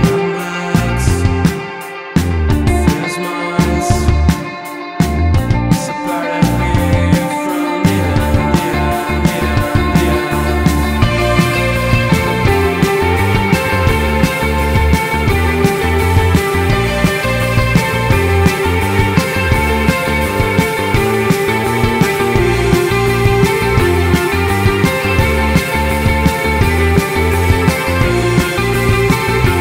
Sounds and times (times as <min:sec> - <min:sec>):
Music: 0:00.0 - 0:29.6.